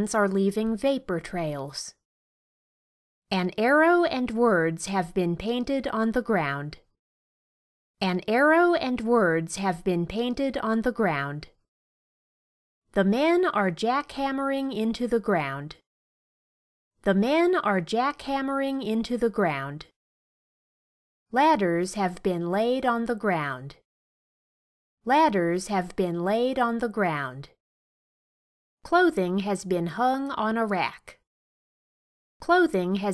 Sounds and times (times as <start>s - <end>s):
Speech: 0.0s - 2.0s, 3.3s - 6.8s, 8.0s - 11.6s, 13.0s - 15.8s, 17.0s - 20.0s, 21.4s - 23.8s, 25.1s - 27.6s, 28.9s - 31.2s, 32.4s - 33.1s.